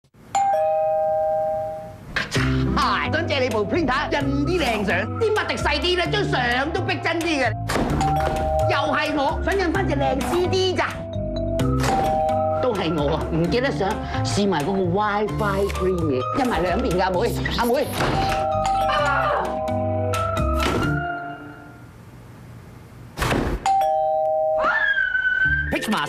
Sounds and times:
Music: 2.3 - 21.9, 25.4 - 26.0.

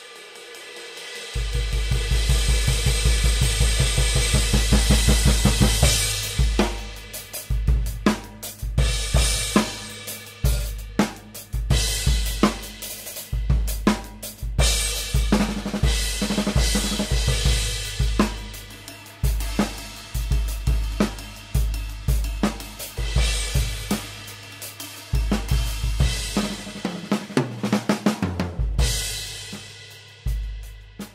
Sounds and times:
Hi-hat: 0.0 - 26.9
Bass drum: 1.4 - 24.5, 25.1 - 31.1.

